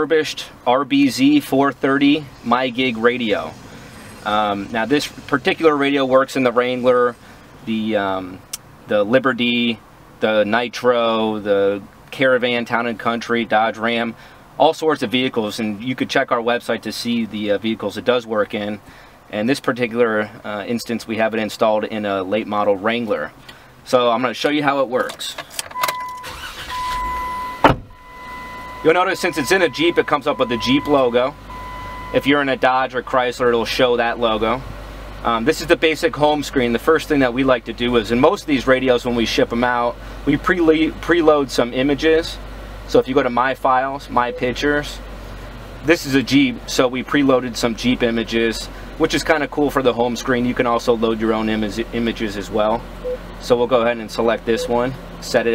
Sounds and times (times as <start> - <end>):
Speech: 0.0 - 3.6, 4.3 - 25.4, 28.9 - 31.4, 32.1 - 45.0, 45.8 - 52.8, 53.4 - 55.5.